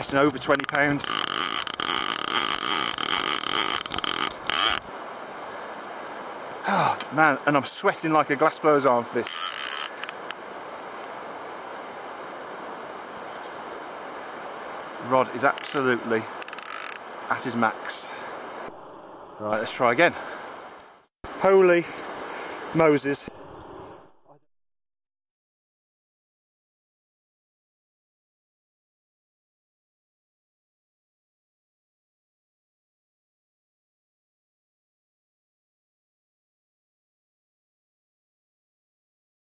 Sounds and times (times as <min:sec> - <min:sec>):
Speech: 0:00.0 - 0:01.2, 0:06.7 - 0:09.3, 0:15.0 - 0:16.3, 0:17.3 - 0:18.2, 0:19.4 - 0:20.2, 0:21.4 - 0:22.0, 0:22.7 - 0:23.3
Stream: 0:00.0 - 0:24.2.